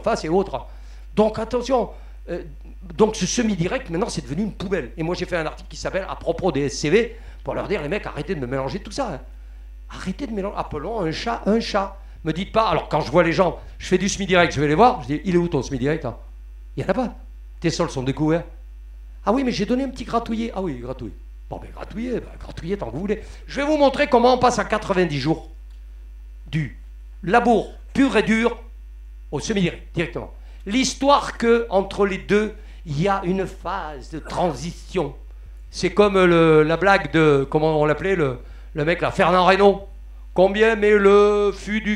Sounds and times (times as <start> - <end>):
Speech: 0.0 - 9.3, 9.9 - 18.6, 19.2 - 25.5, 26.5 - 28.7, 29.3 - 41.9.